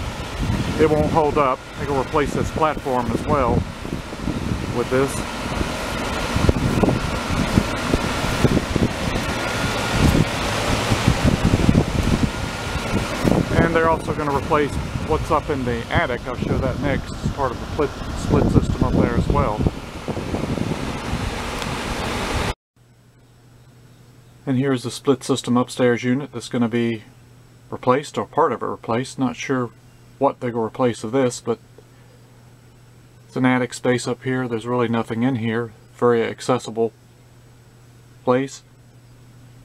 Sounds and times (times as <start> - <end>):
Wind: 0.0 - 39.6.